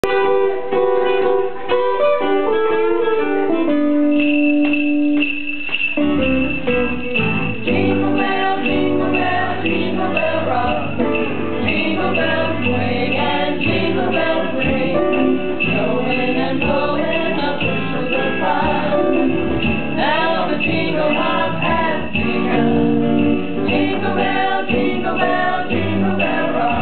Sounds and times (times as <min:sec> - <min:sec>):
Jingle, tinkle: 0:04.0 - 0:26.8.